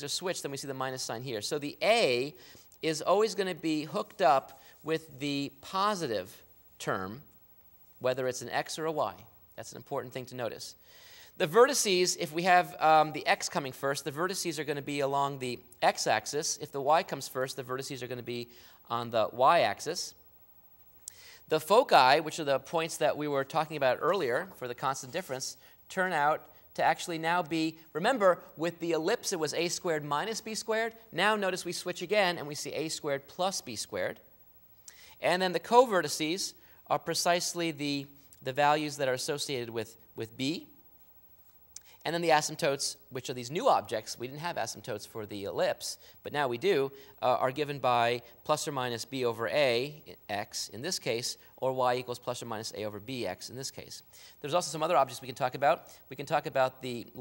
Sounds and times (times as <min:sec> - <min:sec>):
Speech: 0:00.0 - 0:07.3, 0:08.0 - 0:10.8, 0:11.4 - 0:20.2, 0:21.5 - 0:34.3, 0:35.2 - 0:40.8, 0:42.0 - 0:57.2.